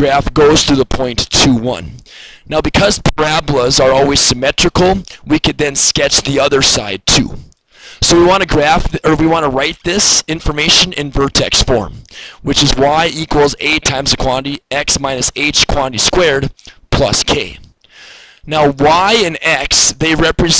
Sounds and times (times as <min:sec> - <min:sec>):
Speech: 0:00.0 - 0:17.7, 0:18.5 - 0:20.5.